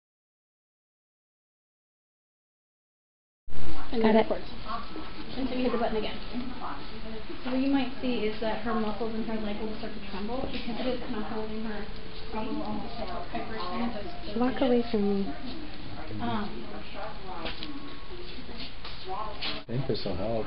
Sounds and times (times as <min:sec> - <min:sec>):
Speech: 0:03.7 - 0:20.4.